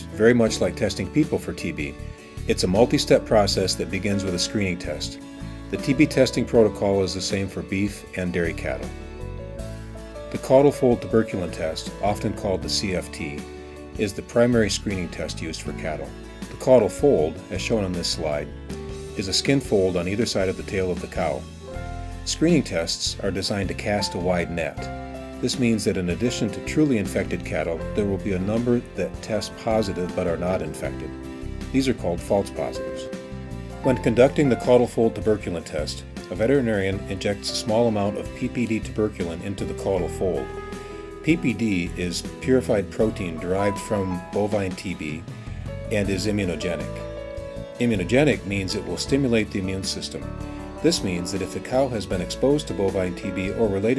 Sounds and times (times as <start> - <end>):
Speech: 0.0 - 8.9, 10.3 - 13.4, 14.0 - 18.5, 19.2 - 21.5, 22.3 - 33.1, 33.8 - 40.5, 41.2 - 45.2, 45.8 - 47.0, 47.8 - 53.9
Music: 0.0 - 53.9.